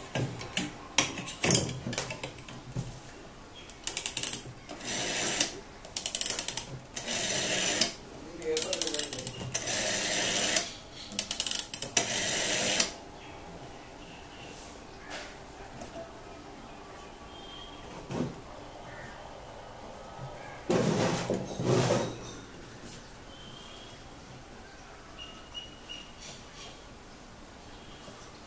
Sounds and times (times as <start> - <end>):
Speech: 8.2 - 9.4.